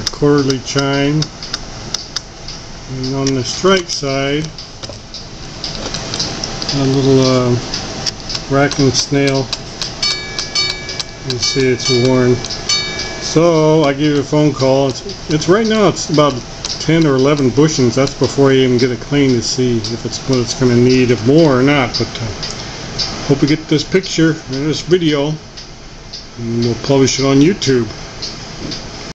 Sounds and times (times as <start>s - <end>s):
Speech: 0.0s - 1.3s, 2.9s - 4.6s, 6.7s - 7.7s, 8.5s - 9.6s, 11.2s - 12.4s, 13.2s - 22.5s, 23.3s - 25.4s, 26.4s - 28.0s.